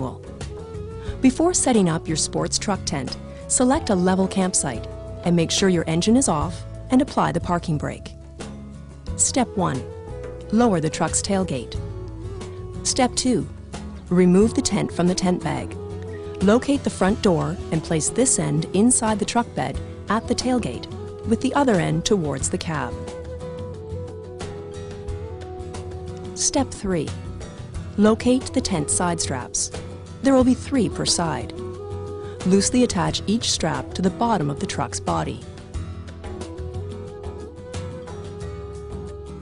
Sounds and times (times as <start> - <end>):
Music: 0.0 - 39.4
Speech: 1.2 - 8.1, 9.2 - 9.9, 10.5 - 11.8, 12.8 - 13.5, 14.1 - 15.8, 16.4 - 23.0, 26.4 - 27.2, 28.0 - 31.5, 32.5 - 35.4.